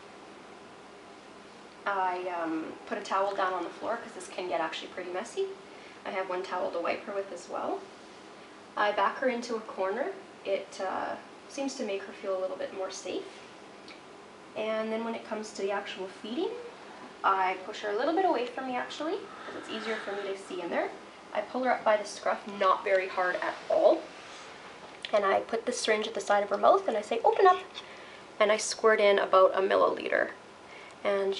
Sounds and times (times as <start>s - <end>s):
Speech: 1.9s - 7.9s, 8.8s - 13.4s, 14.6s - 24.1s, 25.1s - 30.4s, 31.0s - 31.3s.